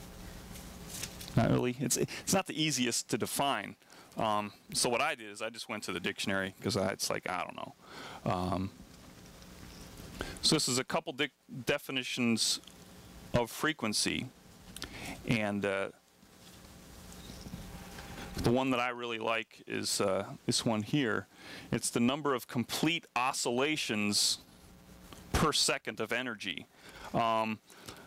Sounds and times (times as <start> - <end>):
Speech: 1.4 - 8.7, 10.4 - 12.6, 13.4 - 14.3, 15.2 - 16.0, 18.4 - 24.4, 25.3 - 27.6.